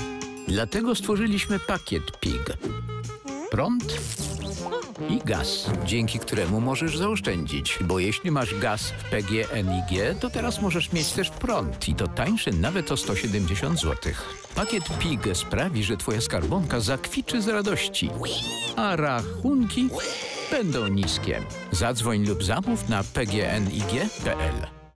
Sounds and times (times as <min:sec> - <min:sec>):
Music: 0:00.0 - 0:24.9
Speech: 0:00.5 - 0:02.6, 0:03.5 - 0:04.1, 0:05.1 - 0:24.7
Oink: 0:19.8 - 0:21.1.